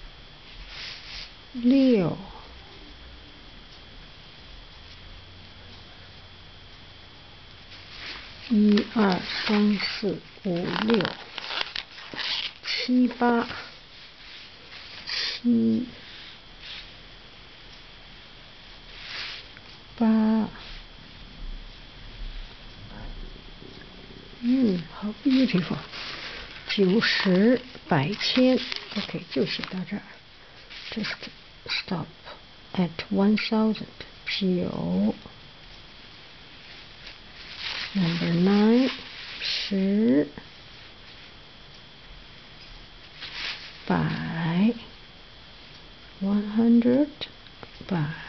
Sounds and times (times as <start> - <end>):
Inside, small room: 0.0 - 48.2
Speech: 1.6 - 2.3, 8.5 - 11.2, 12.9 - 13.7, 15.4 - 16.0, 20.0 - 20.8, 24.4 - 25.9, 26.7 - 30.2, 30.9 - 35.3, 38.0 - 40.4, 43.9 - 44.9, 46.2 - 47.3, 47.9 - 48.2.